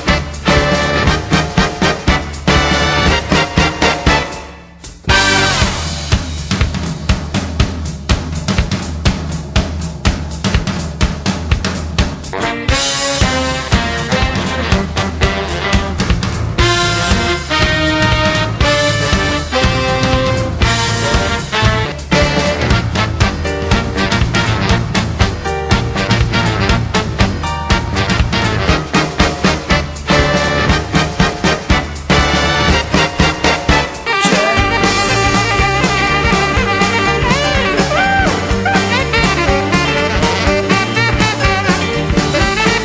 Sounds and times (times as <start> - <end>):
Music: 0.0 - 42.8.